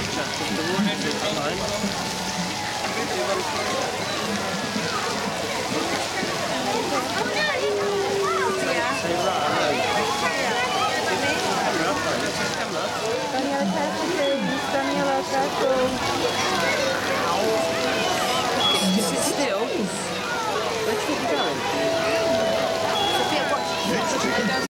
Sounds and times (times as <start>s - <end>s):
Music: 1.6s - 5.1s, 8.2s - 24.6s.